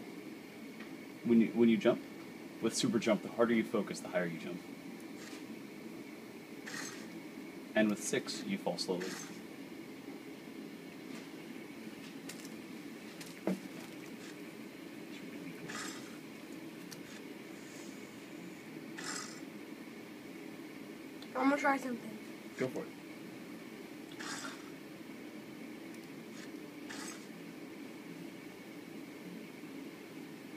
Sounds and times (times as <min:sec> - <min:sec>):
Speech: 0:07.8 - 0:09.3, 0:21.4 - 0:22.9.